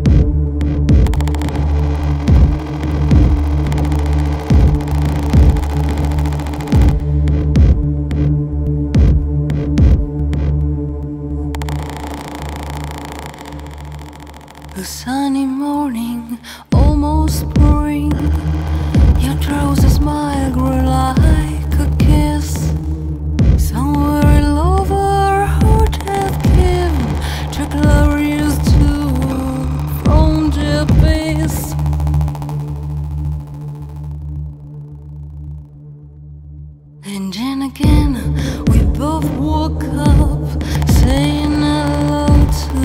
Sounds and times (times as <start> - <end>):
Music: 0.0 - 42.8.